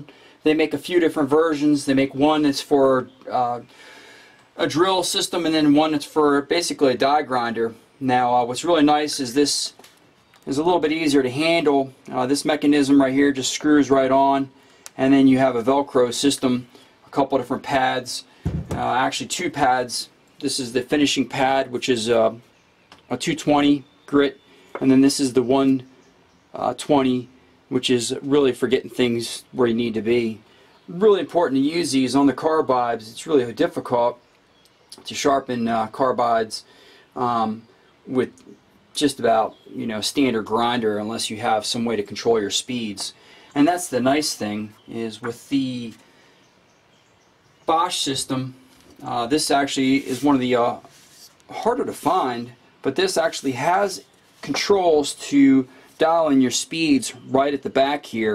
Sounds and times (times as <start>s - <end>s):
Speech: 0.0s - 3.7s, 4.6s - 9.8s, 10.4s - 22.5s, 23.1s - 25.9s, 26.5s - 34.2s, 35.0s - 46.0s, 47.7s - 50.9s, 51.5s - 58.3s.